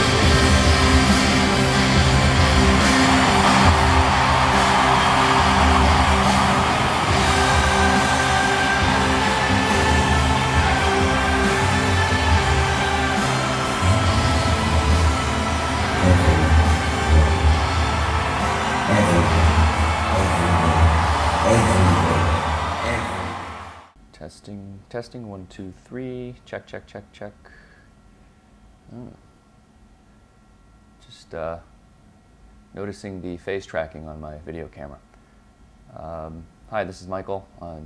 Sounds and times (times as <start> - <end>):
Speech: 16.0 - 17.3, 18.9 - 19.5, 20.2 - 23.4, 24.1 - 27.6, 28.9 - 29.2, 31.0 - 31.7, 32.8 - 35.0, 35.9 - 37.8.